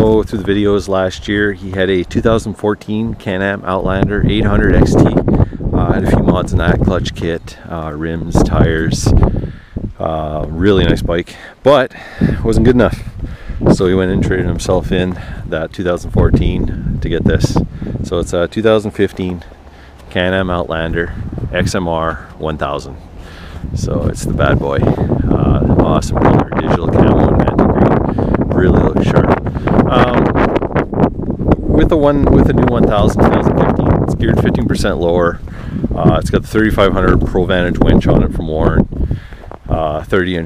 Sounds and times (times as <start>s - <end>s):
Speech: 0.0s - 9.2s, 10.0s - 19.5s, 20.1s - 23.0s, 23.8s - 30.4s, 31.8s - 38.9s, 39.7s - 40.4s.